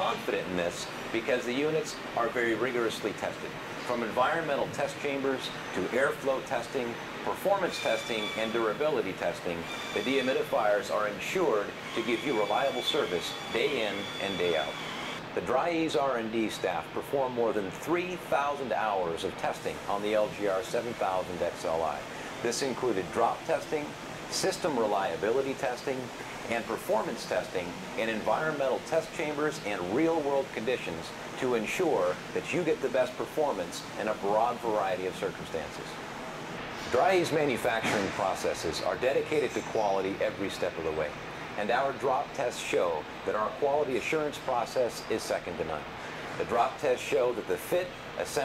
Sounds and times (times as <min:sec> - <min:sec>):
Speech: 0:00.0 - 0:14.8, 0:15.4 - 0:36.0, 0:36.9 - 0:48.4.